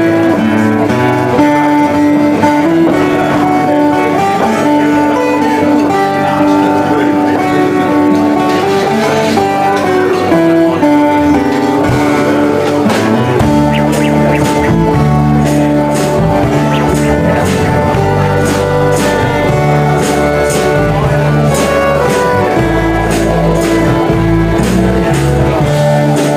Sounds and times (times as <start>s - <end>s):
Music: 0.0s - 26.3s
Speech: 2.3s - 26.3s.